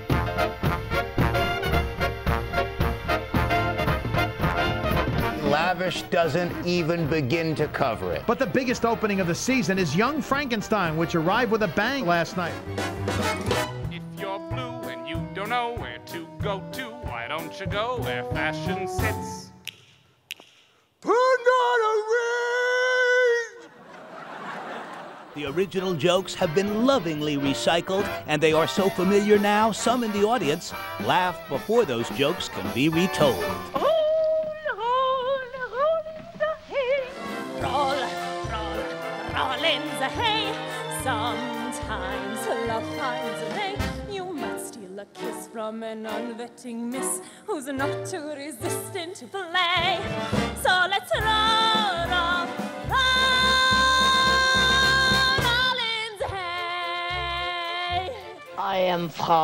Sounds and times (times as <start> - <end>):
Music: 0.0 - 20.5, 25.4 - 59.4
Speech: 5.4 - 12.6, 25.4 - 33.6, 58.6 - 59.4.